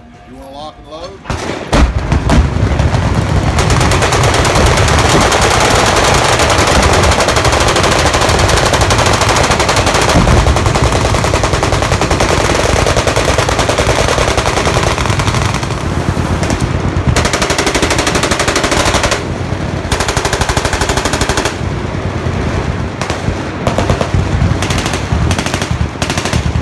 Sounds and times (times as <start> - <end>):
Machine gun: 1.8 - 21.7, 23.0 - 26.6.